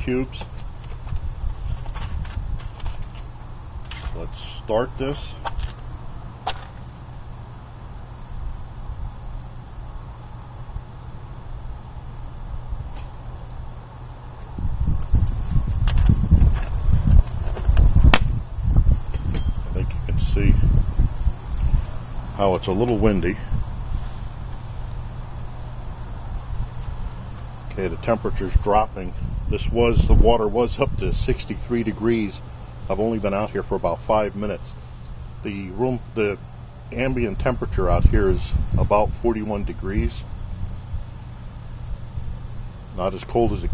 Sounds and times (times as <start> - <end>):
Speech: 0.0 - 0.5, 4.2 - 5.4, 19.8 - 20.6, 22.4 - 23.5, 27.7 - 34.7, 35.4 - 40.3, 43.0 - 43.7.